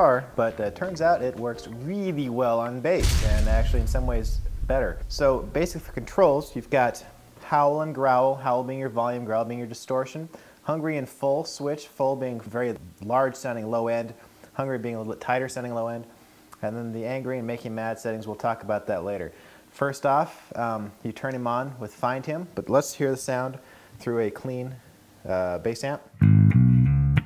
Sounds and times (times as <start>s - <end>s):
Speech: 0.0s - 26.2s.